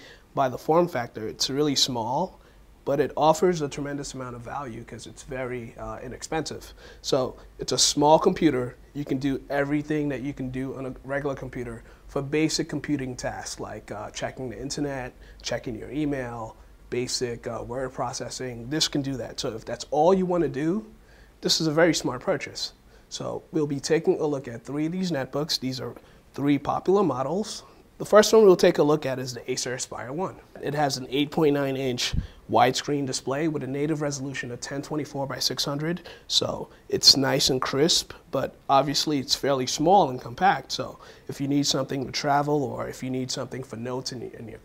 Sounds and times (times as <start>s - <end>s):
Speech: 0.3s - 44.6s.